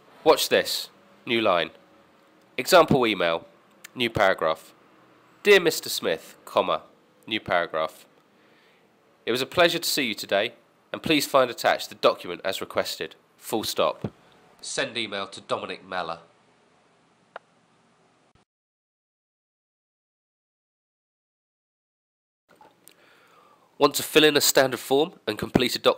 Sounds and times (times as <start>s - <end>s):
Narration, monologue: 0.0s - 17.5s, 22.5s - 25.9s
Male speech, man speaking: 0.2s - 1.8s, 2.6s - 4.8s, 5.4s - 8.1s, 9.3s - 16.3s, 23.8s - 25.9s.